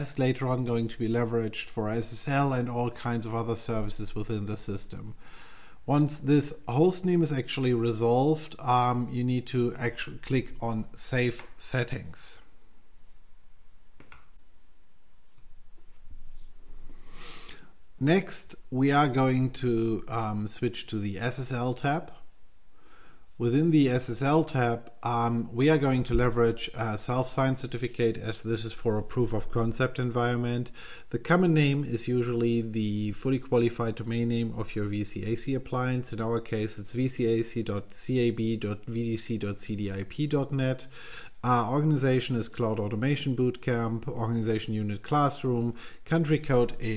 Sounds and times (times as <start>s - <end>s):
Speech: 0.0s - 5.2s, 5.9s - 12.5s, 18.0s - 22.3s, 23.4s - 46.9s
Inside, small room: 0.0s - 46.9s.